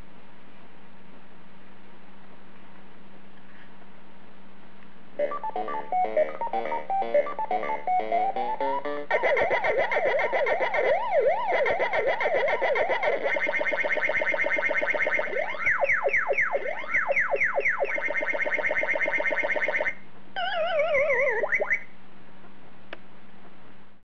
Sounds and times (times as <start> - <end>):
Inside, small room: 0.0 - 24.0.